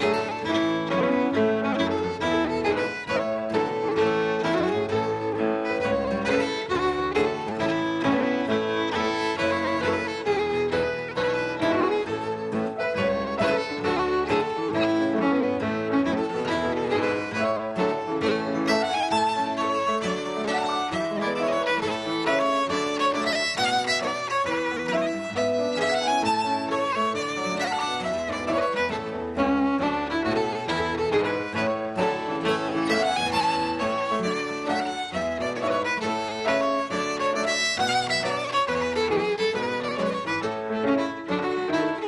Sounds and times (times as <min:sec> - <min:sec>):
Violin, fiddle: 0:00.0 - 0:42.0.